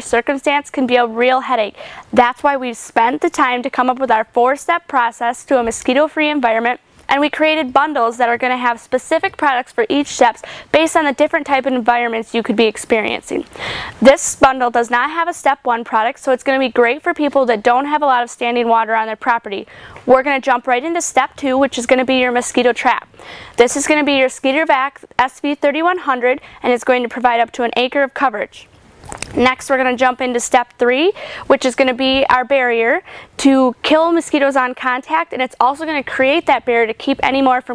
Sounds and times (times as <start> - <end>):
Speech: 0.0 - 23.0, 23.6 - 28.7, 29.3 - 37.7.